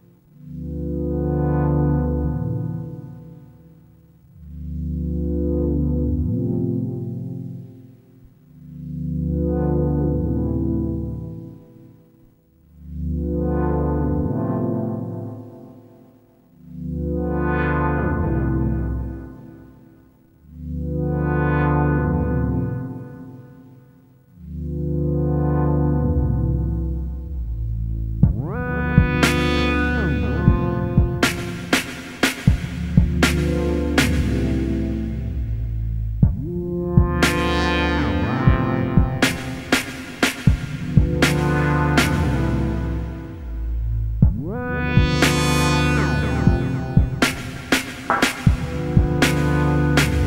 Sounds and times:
Music: 0:00.0 - 0:50.2.

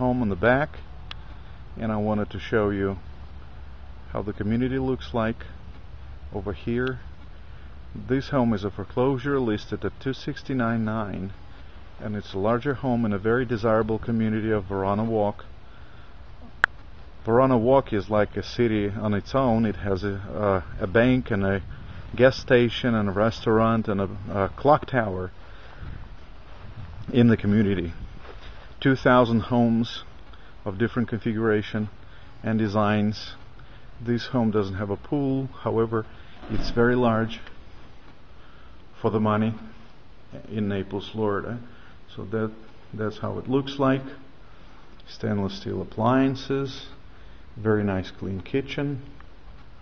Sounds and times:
Speech: 0:00.0 - 0:00.8, 0:01.8 - 0:03.1, 0:04.1 - 0:05.6, 0:06.3 - 0:07.1, 0:07.9 - 0:11.4, 0:12.0 - 0:15.5, 0:17.2 - 0:25.4, 0:27.0 - 0:28.0, 0:28.8 - 0:33.4, 0:34.0 - 0:37.6, 0:39.0 - 0:44.3, 0:45.0 - 0:47.0, 0:47.6 - 0:49.2.

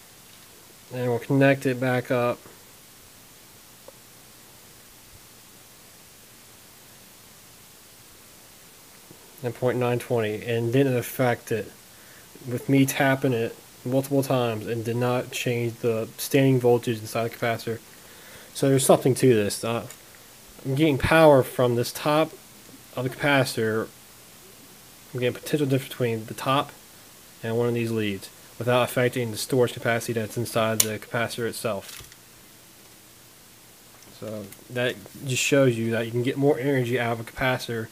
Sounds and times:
Speech: 0:00.9 - 0:02.5, 0:09.4 - 0:11.8, 0:12.4 - 0:17.8, 0:18.5 - 0:20.0, 0:20.6 - 0:24.0, 0:25.1 - 0:26.8, 0:27.4 - 0:32.0, 0:34.1 - 0:37.9.

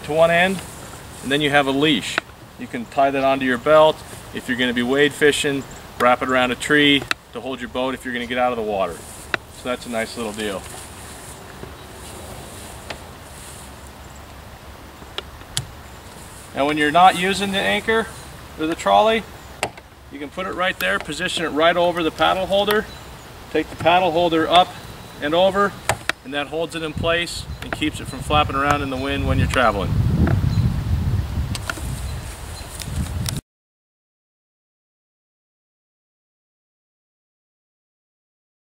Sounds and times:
Speech: 0:00.0 - 0:00.6, 0:01.2 - 0:09.0, 0:09.6 - 0:10.7, 0:16.6 - 0:19.3, 0:20.1 - 0:22.9, 0:23.5 - 0:29.9
Outside, rural or natural: 0:00.0 - 0:33.4.

